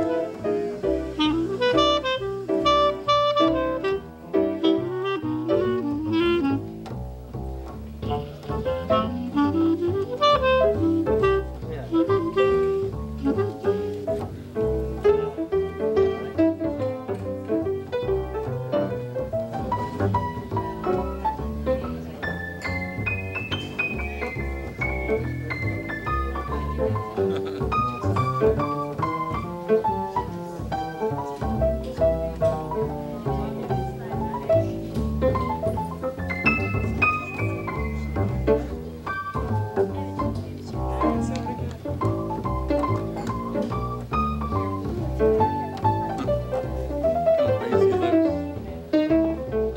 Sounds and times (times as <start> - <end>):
Music: 0.0 - 49.7
Speech: 11.6 - 12.3, 29.8 - 38.8, 39.4 - 42.2.